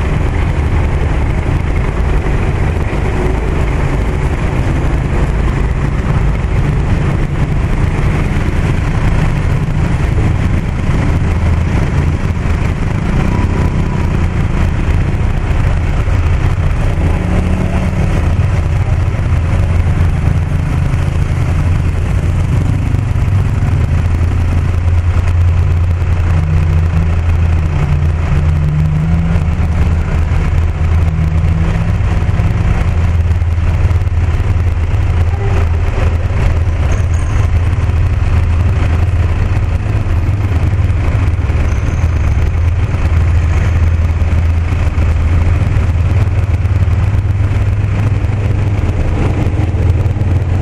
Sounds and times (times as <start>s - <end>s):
Car: 0.0s - 50.6s.